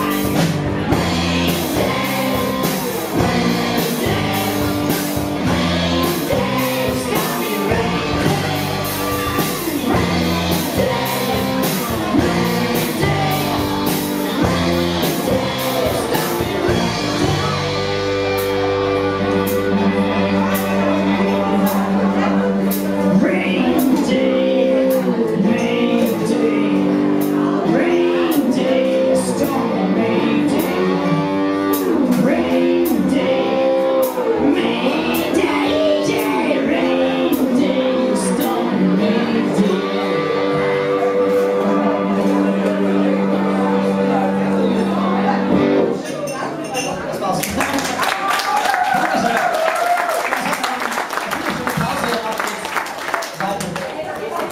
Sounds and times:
Inside, large room or hall: 0.0 - 54.5
Music: 0.0 - 54.5
Speech: 41.6 - 49.5, 50.3 - 54.5.

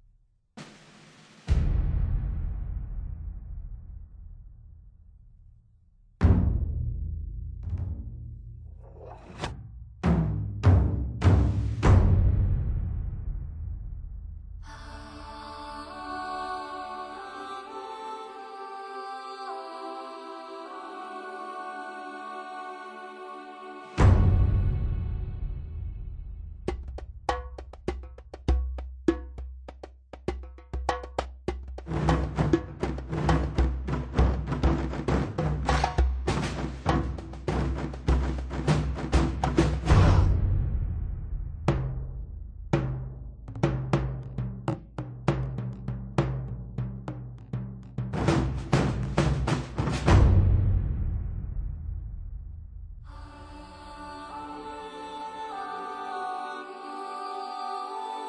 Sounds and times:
Music: 6.2 - 58.2.

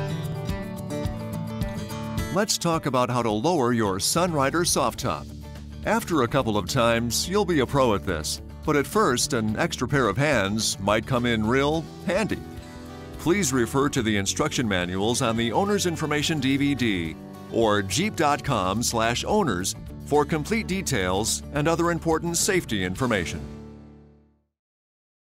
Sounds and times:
Music: 0.0 - 24.6
Speech: 2.3 - 12.5, 13.2 - 23.5.

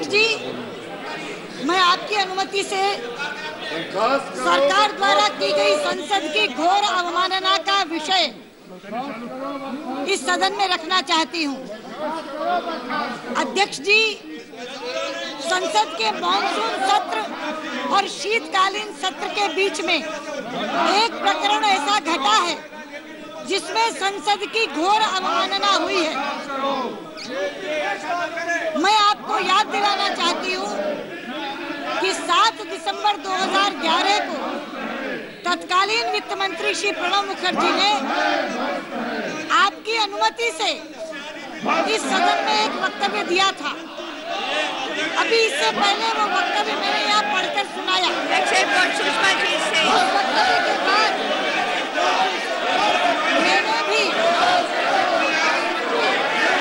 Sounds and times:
Female speech, woman speaking: 0.0 - 0.4, 1.6 - 3.0, 4.4 - 8.4, 10.1 - 11.6, 13.4 - 14.2, 15.4 - 17.3, 17.9 - 20.0, 20.8 - 22.6, 23.5 - 26.2, 28.8 - 30.8, 32.0 - 34.4, 35.4 - 38.0, 39.5 - 40.8, 41.7 - 43.8, 45.2 - 51.2, 53.4 - 54.2
Narration, monologue: 0.0 - 50.2.

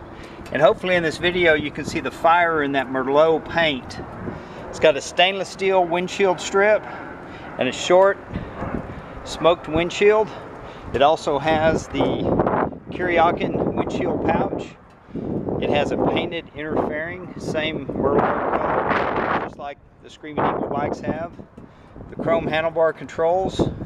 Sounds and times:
Speech: 0.5 - 4.0, 4.7 - 6.8, 7.6 - 8.2, 9.3 - 10.4, 11.0 - 12.4, 13.0 - 14.8, 15.6 - 21.4, 22.1 - 23.8.

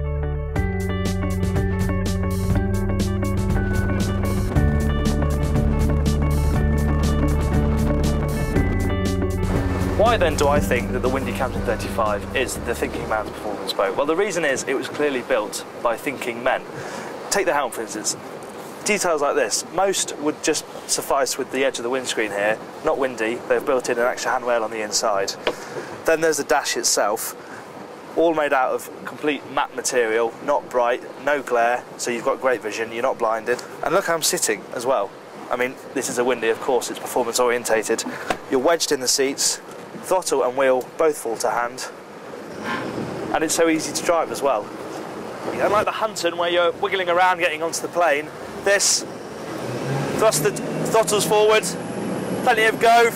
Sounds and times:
Motorboat, speedboat: 3.5 - 27.2, 40.8 - 53.1
Speech: 10.0 - 16.7, 17.3 - 18.2, 18.8 - 25.4, 26.1 - 27.4, 28.2 - 42.0, 43.3 - 44.7, 45.5 - 49.1, 50.2 - 51.8, 52.4 - 53.1.

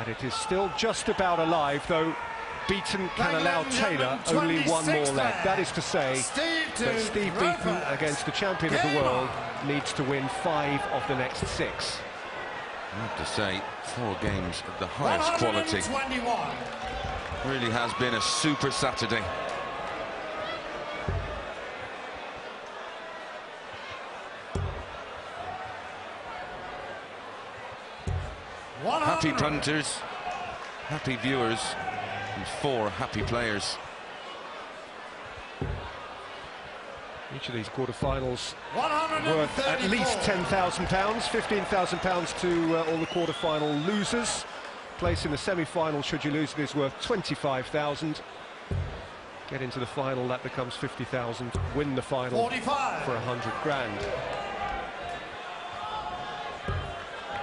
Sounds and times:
Speech: 0.0 - 12.0, 13.0 - 16.6, 17.4 - 19.4, 28.8 - 30.0, 30.9 - 33.8, 37.3 - 48.2, 49.5 - 54.2.

